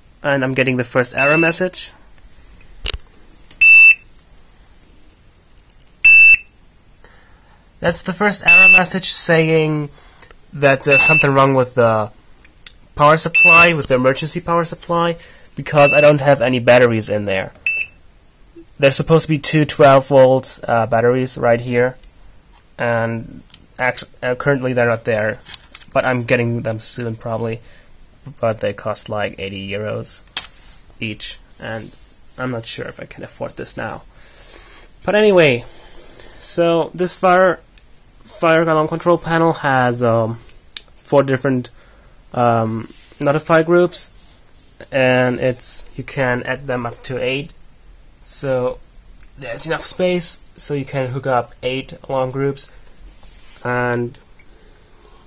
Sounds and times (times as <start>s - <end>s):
Speech: 0.2s - 2.0s, 7.8s - 12.2s, 13.0s - 17.6s, 18.7s - 22.0s, 22.8s - 27.6s, 28.2s - 30.3s, 31.0s - 34.1s, 35.0s - 35.7s, 36.4s - 37.7s, 38.3s - 44.2s, 44.8s - 47.6s, 48.2s - 48.8s, 49.4s - 52.8s, 53.6s - 54.2s
Fire alarm: 1.2s - 1.6s, 3.6s - 4.0s, 6.0s - 6.5s, 8.5s - 8.9s, 10.9s - 11.3s, 13.4s - 13.7s, 15.8s - 16.2s, 17.7s - 18.0s
Smoke detector, smoke alarm: 1.2s - 1.6s, 3.6s - 4.1s, 6.0s - 6.6s, 8.5s - 8.9s, 10.9s - 11.3s, 13.4s - 13.7s, 15.8s - 16.2s, 17.7s - 18.0s.